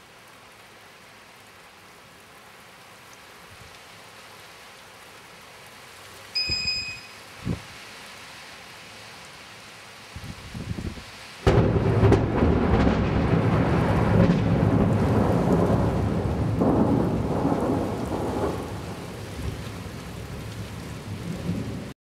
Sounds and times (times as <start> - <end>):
Rain on surface: 0.0 - 22.0
Thunder: 11.5 - 19.6.